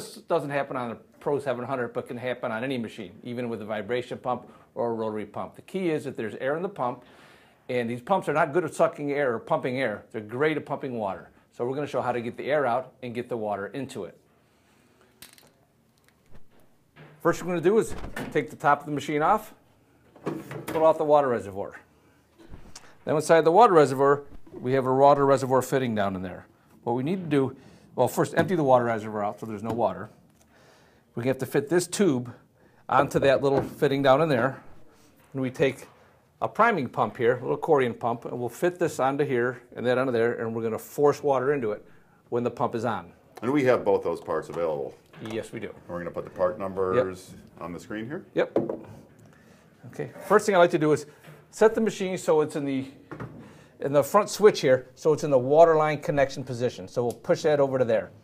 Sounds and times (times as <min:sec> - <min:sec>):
Speech: 0:00.0 - 0:07.0, 0:07.7 - 0:14.2, 0:17.2 - 0:19.6, 0:20.7 - 0:21.9, 0:23.0 - 0:30.2, 0:31.2 - 0:34.6, 0:35.3 - 0:48.6, 0:49.8 - 0:53.0, 0:53.8 - 0:58.2.